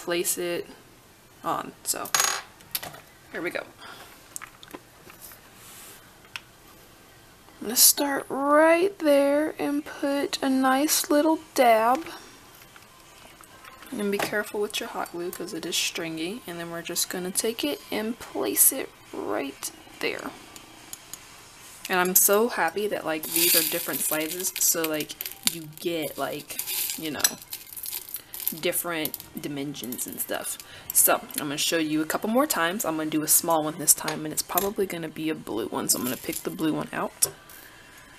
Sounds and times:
Inside, small room: 0.0 - 38.1
Speech: 3.3 - 3.8, 7.6 - 12.2, 13.9 - 20.3, 21.9 - 27.4, 28.6 - 37.3.

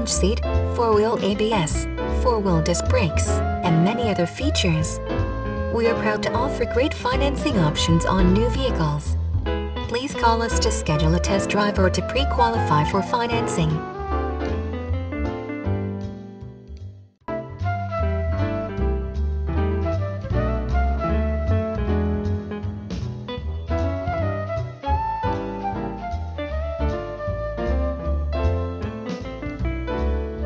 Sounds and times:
Music: 0.0 - 30.4.

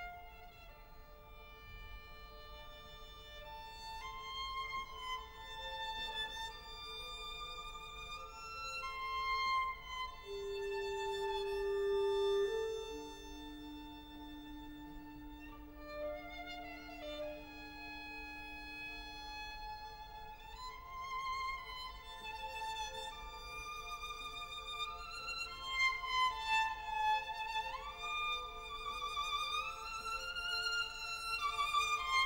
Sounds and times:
Violin, fiddle: 0.0 - 32.2.

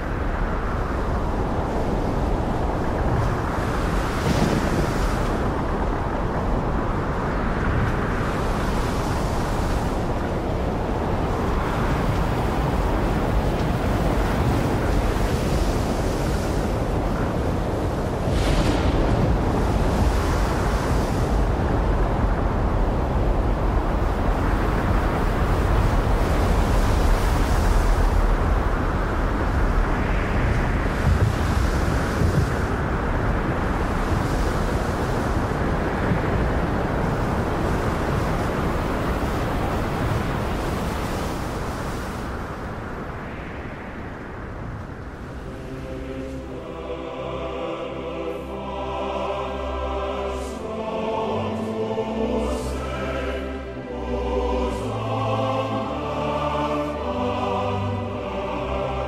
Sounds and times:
Outside, rural or natural: 0.0 - 59.0.

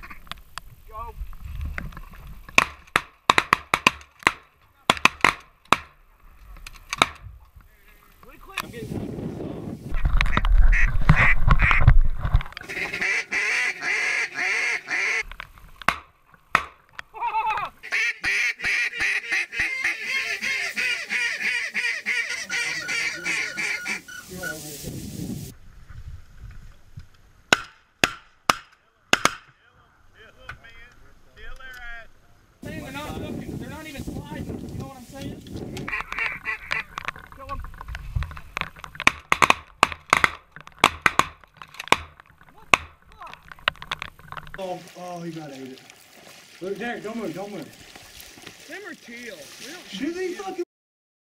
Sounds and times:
Honk: 10.3 - 11.9, 12.6 - 15.3, 17.5 - 24.6, 35.9 - 37.0.

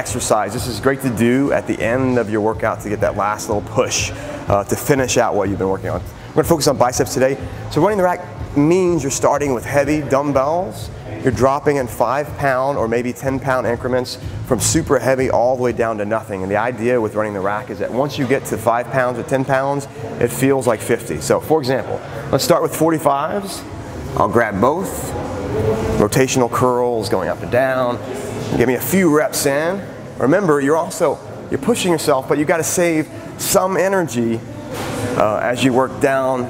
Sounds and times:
Speech: 0.0 - 34.5, 35.2 - 36.5.

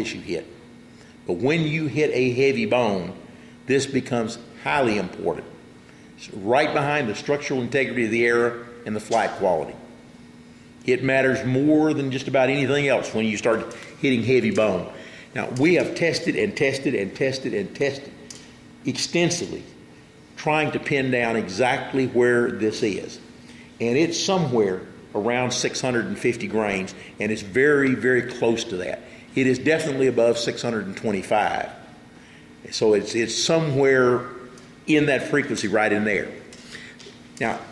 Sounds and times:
Speech: 0.0 - 0.6, 1.3 - 5.6, 6.2 - 9.9, 10.8 - 18.2, 18.8 - 19.8, 20.4 - 23.2, 23.8 - 31.8, 32.6 - 36.4, 37.4 - 37.7.

